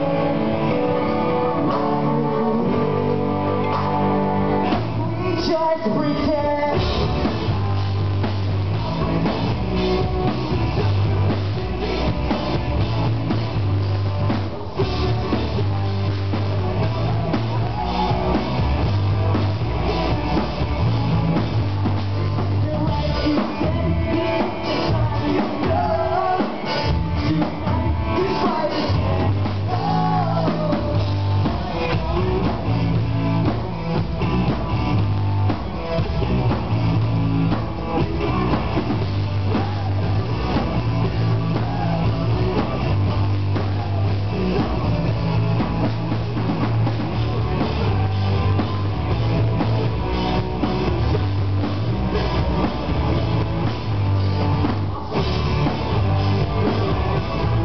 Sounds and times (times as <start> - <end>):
Music: 0.0 - 57.6.